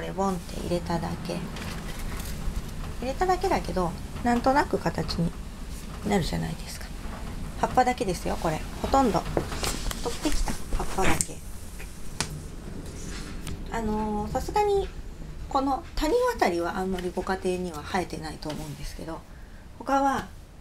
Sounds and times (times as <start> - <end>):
Speech: 0.0 - 1.5, 3.0 - 5.4, 6.0 - 6.9, 7.6 - 9.3, 10.0 - 11.4, 13.7 - 14.9, 15.5 - 20.3.